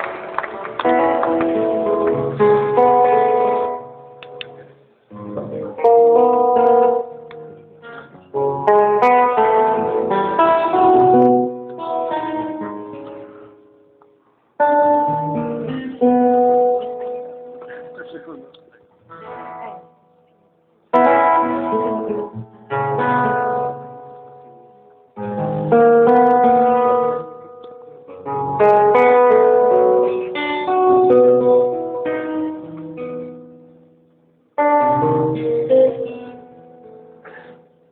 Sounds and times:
Guitar: 0.0 - 37.9.

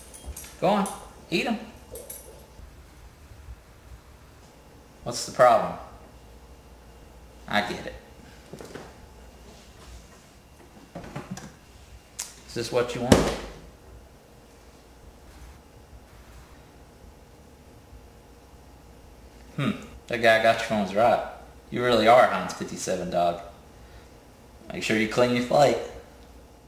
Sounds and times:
Speech: 0.6 - 1.8, 5.0 - 6.0, 7.5 - 8.1, 12.5 - 13.4, 19.6 - 23.6, 24.6 - 26.0.

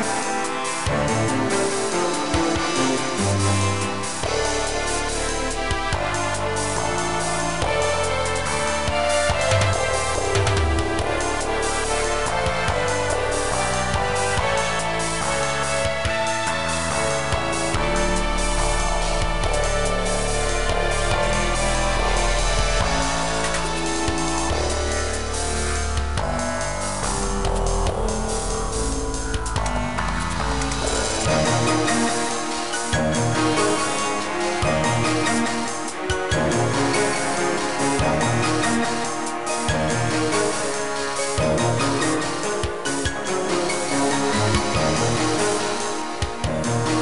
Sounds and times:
Funny music: 0.0 - 47.0.

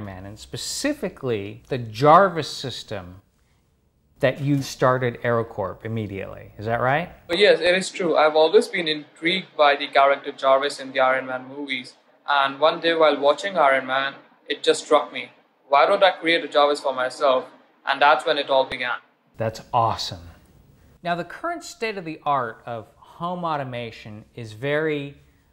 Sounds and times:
Speech: 0.0 - 3.2, 4.2 - 20.4, 21.0 - 25.2.

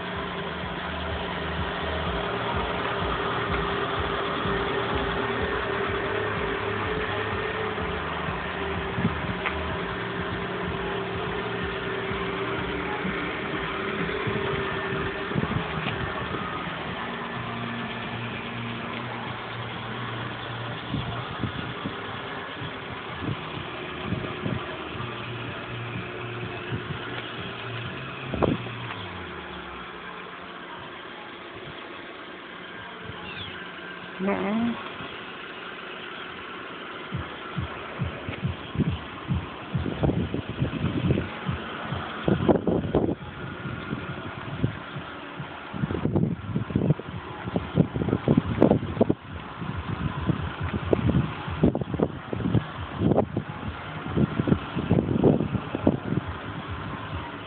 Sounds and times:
Speech: 34.2 - 34.8.

